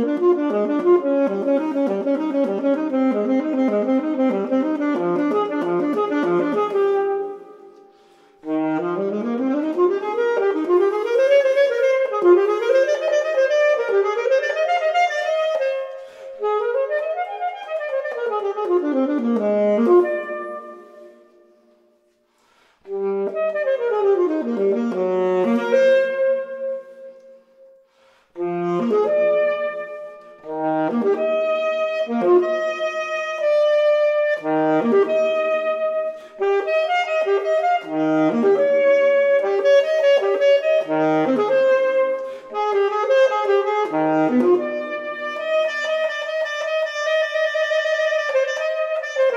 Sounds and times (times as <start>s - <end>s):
Brass instrument: 0.0s - 22.2s, 22.8s - 27.7s, 28.3s - 49.3s
Saxophone: 0.0s - 49.3s.